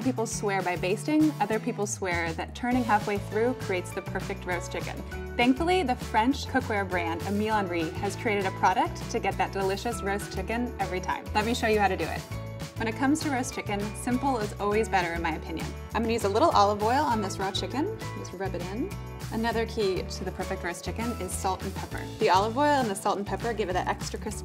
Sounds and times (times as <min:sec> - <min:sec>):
Speech: 0:00.0 - 0:12.2, 0:12.8 - 0:24.4
Music: 0:00.0 - 0:24.4.